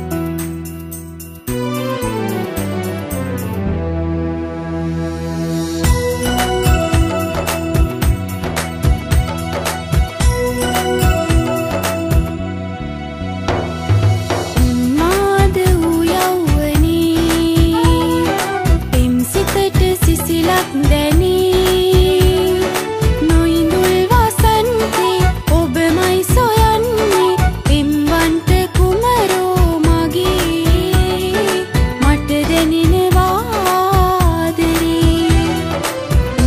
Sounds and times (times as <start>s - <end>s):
Folk music: 1.5s - 36.4s.